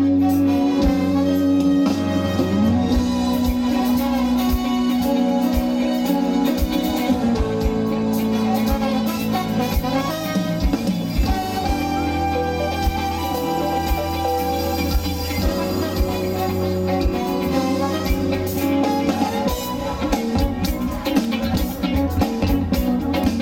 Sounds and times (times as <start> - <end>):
Music: 0.0 - 23.4.